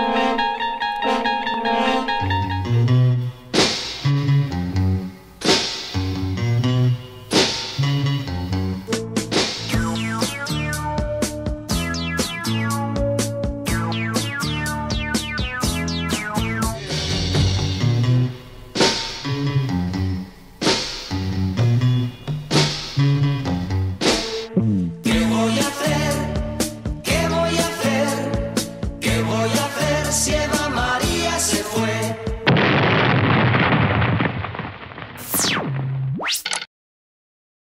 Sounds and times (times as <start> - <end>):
Music: 0.0 - 32.5
Explosion: 13.8 - 19.3, 32.5 - 36.2.